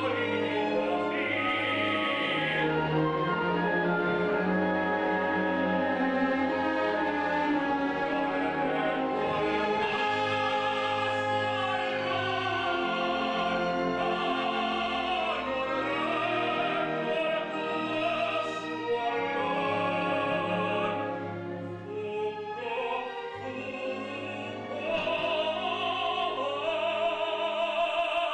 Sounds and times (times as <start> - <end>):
Bowed string instrument: 0.0 - 28.3
Opera: 0.0 - 28.3
Orchestra: 0.0 - 28.3.